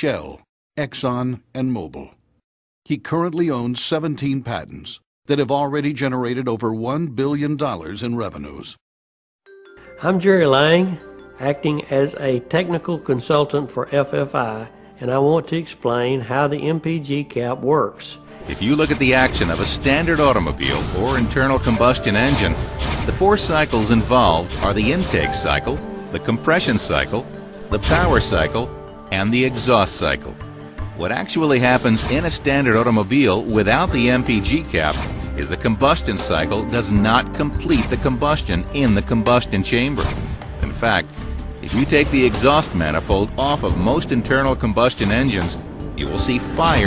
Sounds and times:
Speech: 0.0s - 2.2s, 2.9s - 8.8s, 10.0s - 30.4s, 31.0s - 46.8s
Music: 9.5s - 46.8s.

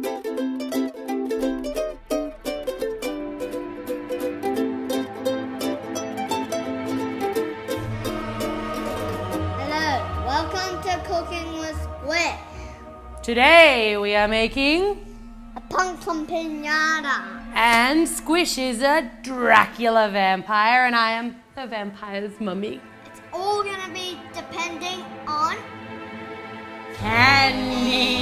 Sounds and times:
Music: 0.0s - 28.2s
Female speech, woman speaking: 13.2s - 15.0s, 17.4s - 22.9s, 27.0s - 28.2s.

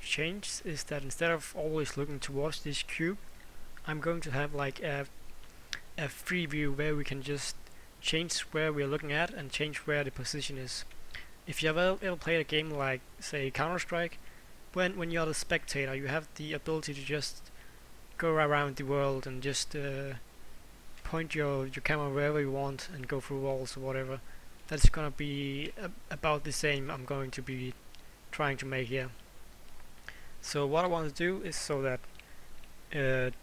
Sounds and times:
Speech: 0.0s - 3.2s, 3.8s - 5.1s, 6.0s - 10.9s, 11.5s - 17.5s, 18.2s - 20.2s, 21.0s - 29.2s, 30.4s - 32.0s, 32.9s - 33.4s.

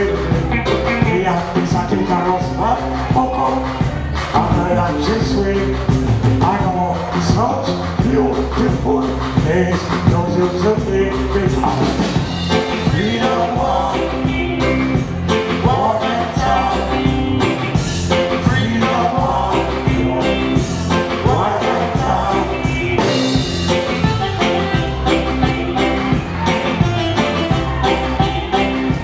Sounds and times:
Music: 0.0s - 29.0s.

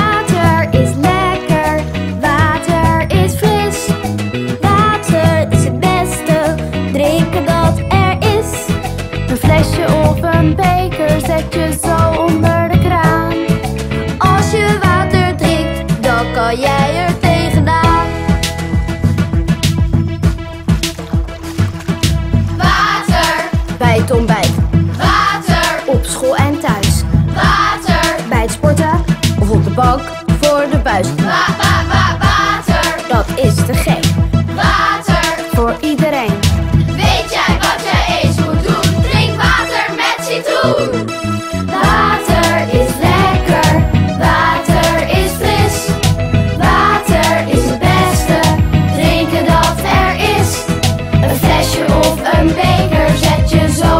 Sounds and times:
Music: 0.0s - 53.9s.

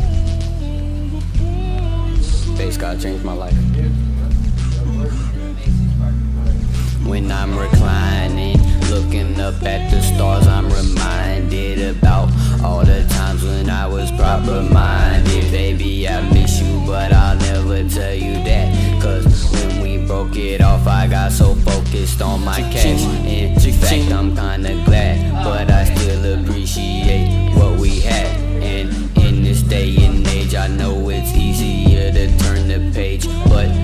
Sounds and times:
Speech: 2.4s - 9.4s, 22.2s - 24.2s.

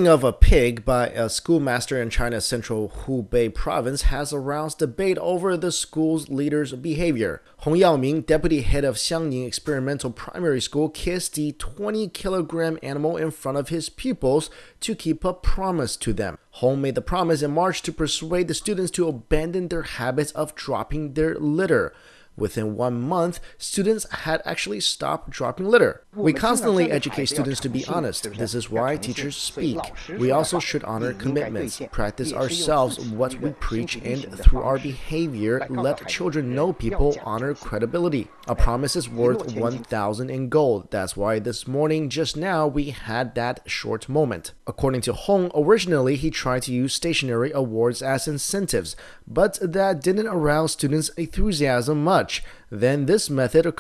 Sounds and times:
Speech: 0.0s - 53.8s.

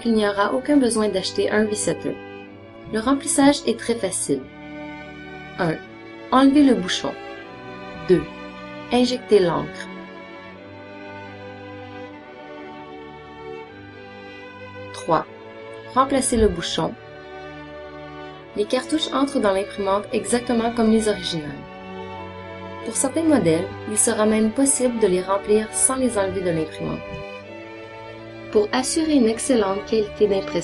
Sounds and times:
Speech: 0.0s - 2.2s, 2.9s - 4.5s, 5.6s - 5.8s, 6.4s - 7.2s, 8.0s - 8.3s, 8.9s - 9.9s, 15.0s - 15.3s, 16.0s - 17.0s, 18.6s - 21.6s, 22.9s - 27.2s, 28.6s - 30.6s
Music: 0.0s - 30.6s.

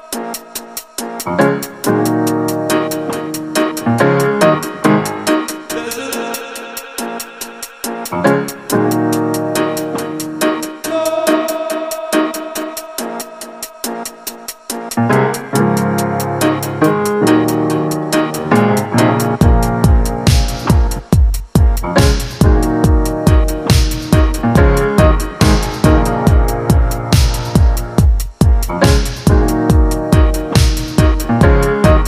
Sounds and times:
Music: 0.0s - 32.0s.

